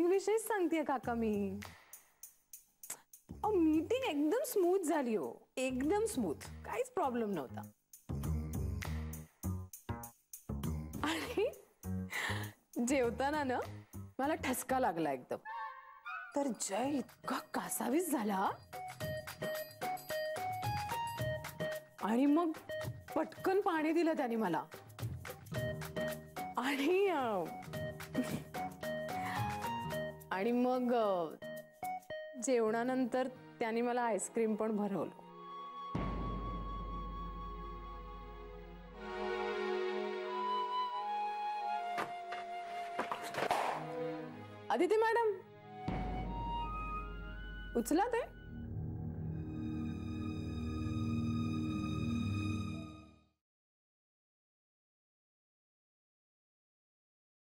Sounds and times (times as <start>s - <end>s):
Speech: 0.0s - 1.6s, 3.5s - 7.7s, 12.8s - 15.4s, 22.0s - 24.7s, 26.6s - 27.5s, 30.3s - 31.4s, 32.4s - 35.1s, 44.7s - 45.4s
Music: 0.0s - 53.4s.